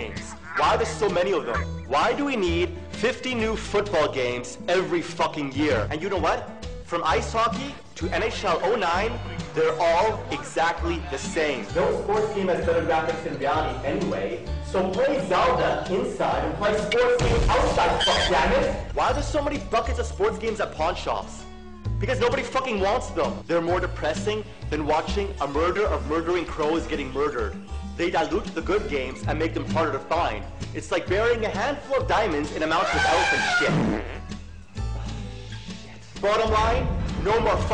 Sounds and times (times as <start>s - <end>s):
Speech: 0.0s - 21.4s, 22.0s - 33.8s, 36.2s - 37.7s
Music: 0.0s - 37.7s.